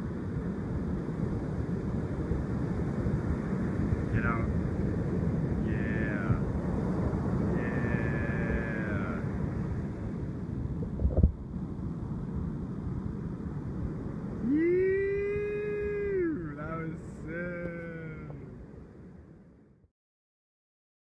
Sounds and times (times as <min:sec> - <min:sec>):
Speech: 0:04.1 - 0:04.5, 0:05.6 - 0:06.4, 0:07.6 - 0:09.3, 0:15.3 - 0:18.5.